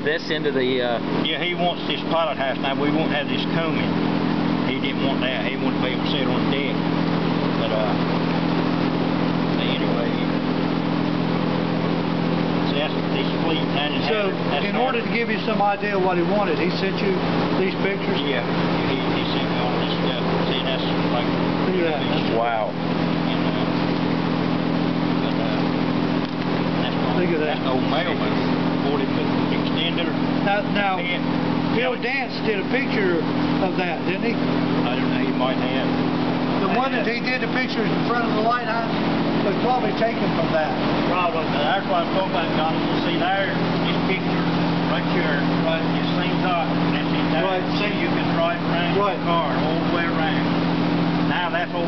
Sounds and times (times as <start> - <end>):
Speech: 0.0 - 4.0, 4.6 - 6.8, 7.4 - 8.0, 9.5 - 10.4, 12.6 - 23.9, 25.1 - 25.8, 26.8 - 50.6, 51.2 - 51.8
Vehicle: 0.0 - 51.8.